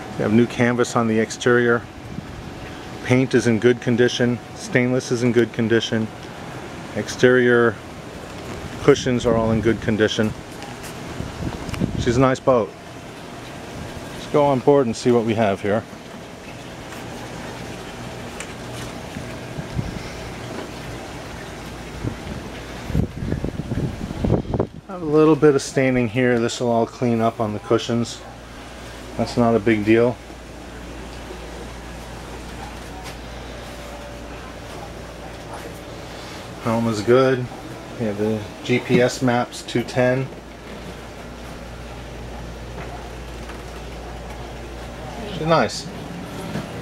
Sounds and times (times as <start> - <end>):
Boat, Water vehicle: 0.0 - 46.8
Speech: 0.1 - 1.9, 3.0 - 6.1, 6.9 - 7.8, 8.8 - 10.4, 12.0 - 12.8, 14.2 - 15.9, 24.9 - 28.4, 29.2 - 30.2, 36.6 - 40.4, 45.0 - 46.0.